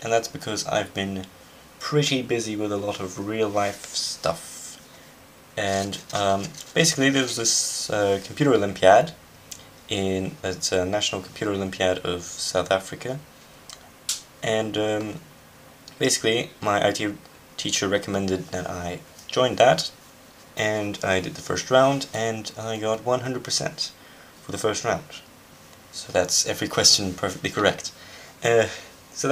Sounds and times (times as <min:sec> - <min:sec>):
Speech: 0:00.0 - 0:04.8, 0:05.6 - 0:09.2, 0:09.9 - 0:13.3, 0:14.4 - 0:15.3, 0:15.9 - 0:20.0, 0:20.6 - 0:25.3, 0:25.9 - 0:29.3.